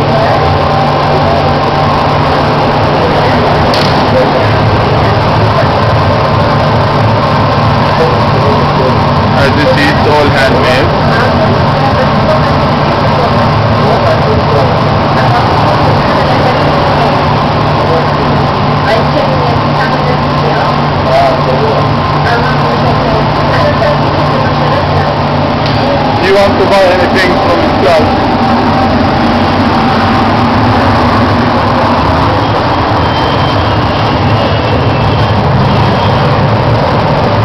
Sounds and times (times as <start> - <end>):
Speech: 2.8 - 6.0, 7.9 - 25.2, 25.8 - 28.1.